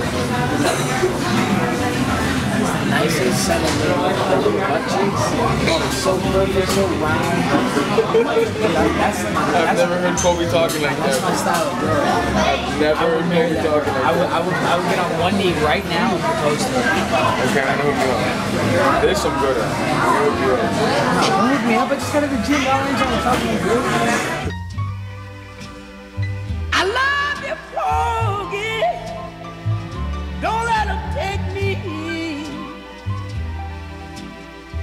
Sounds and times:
Music: 0:00.0 - 0:34.8
Speech: 0:00.3 - 0:24.5.

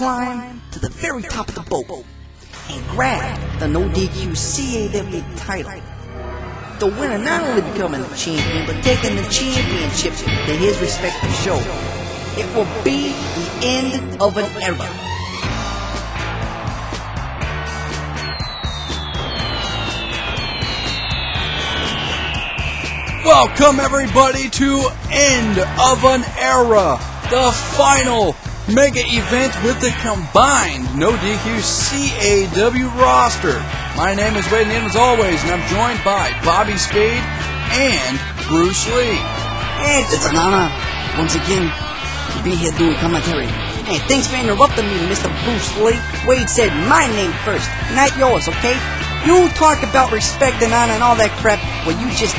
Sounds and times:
Speech: 0:00.0 - 0:02.0, 0:02.6 - 0:05.8, 0:06.8 - 0:11.7, 0:12.4 - 0:15.0, 0:23.3 - 0:39.2, 0:39.8 - 0:41.7, 0:42.4 - 0:52.3
Music: 0:00.0 - 0:52.3.

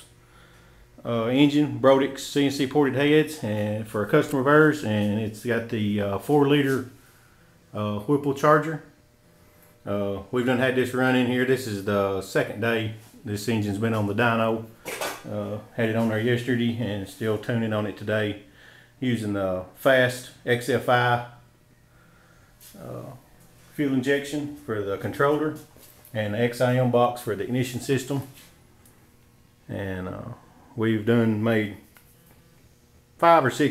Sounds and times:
Speech: 0:01.0 - 0:07.0, 0:07.7 - 0:09.0, 0:09.8 - 0:21.4, 0:22.7 - 0:28.4, 0:29.7 - 0:31.9, 0:33.2 - 0:33.7.

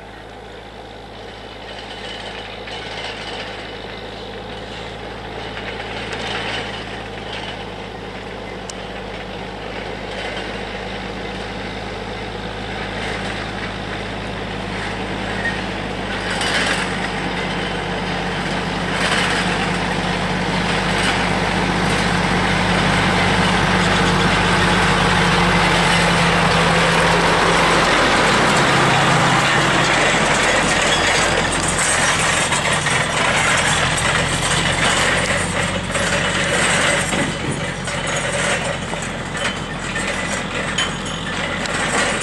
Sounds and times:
Vehicle: 0:00.0 - 0:42.2.

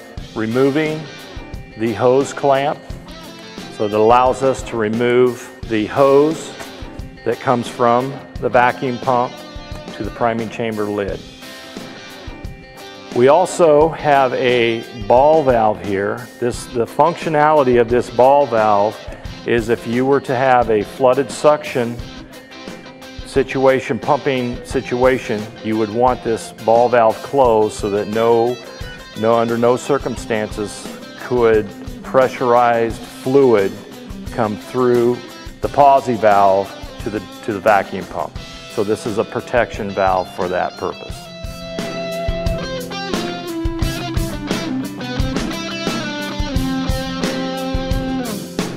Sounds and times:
Music: 0:00.0 - 0:48.7
Speech: 0:00.4 - 0:01.1, 0:01.8 - 0:02.8, 0:03.8 - 0:06.6, 0:07.2 - 0:11.2, 0:13.2 - 0:22.0, 0:23.3 - 0:28.6, 0:29.2 - 0:41.2.

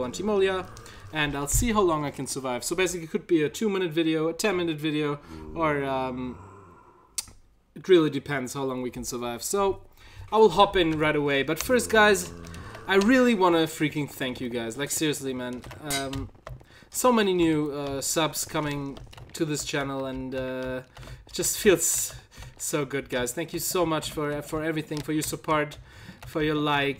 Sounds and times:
Speech: 0:00.0 - 0:06.4, 0:07.8 - 0:12.3, 0:12.9 - 0:16.3, 0:17.0 - 0:26.9.

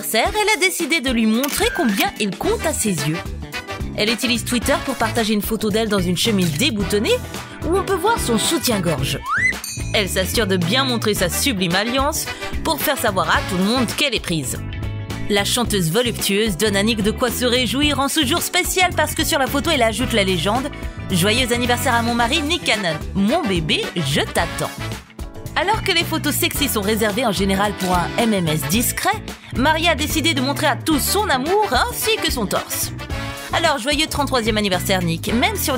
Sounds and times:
Speech: 0:00.0 - 0:03.3, 0:04.0 - 0:09.3, 0:09.9 - 0:14.6, 0:15.3 - 0:24.9, 0:25.6 - 0:35.7
Music: 0:00.0 - 0:35.7.

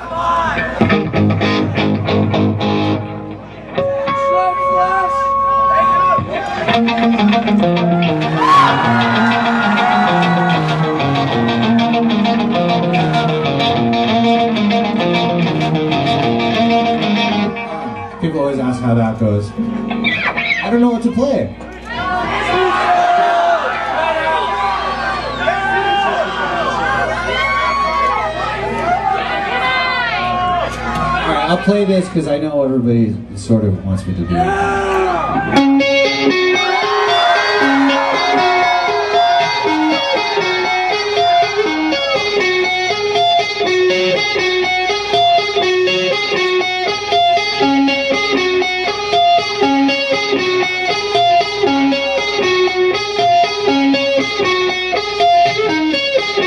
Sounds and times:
Electric guitar: 0:00.6 - 0:22.4, 0:34.4 - 0:56.4.

